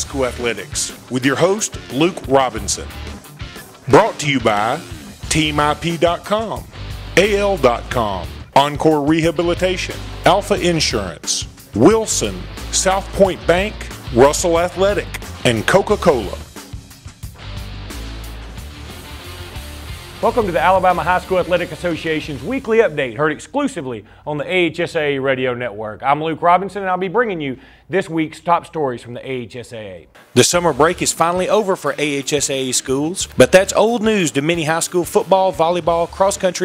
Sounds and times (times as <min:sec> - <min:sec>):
Speech: 0:00.0 - 0:02.9, 0:03.9 - 0:16.4, 0:20.2 - 0:36.6.